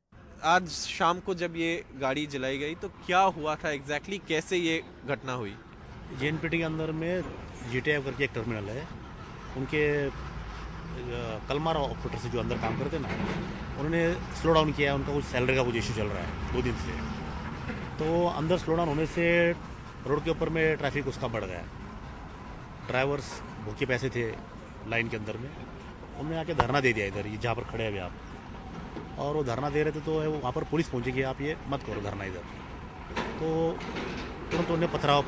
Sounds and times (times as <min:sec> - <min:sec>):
Speech: 0:00.4 - 0:08.9, 0:09.6 - 0:10.2, 0:11.0 - 0:13.2, 0:13.8 - 0:17.0, 0:18.0 - 0:21.7, 0:22.9 - 0:25.6, 0:26.2 - 0:28.2, 0:29.2 - 0:32.4, 0:33.4 - 0:33.9, 0:34.5 - 0:35.2.